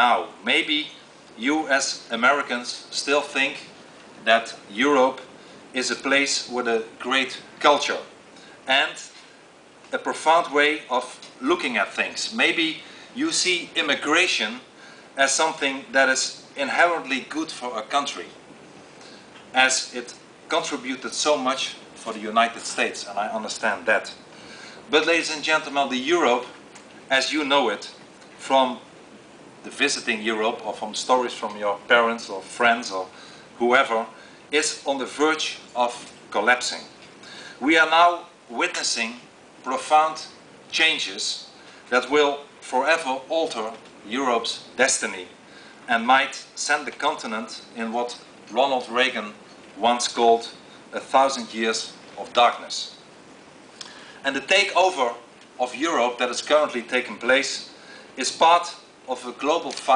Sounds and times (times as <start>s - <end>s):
Male speech, man speaking: 0.0s - 8.1s, 8.7s - 9.2s, 9.9s - 18.4s, 19.5s - 24.2s, 24.9s - 28.9s, 29.7s - 36.9s, 37.6s - 53.0s, 54.2s - 59.9s
Narration, monologue: 0.0s - 59.9s.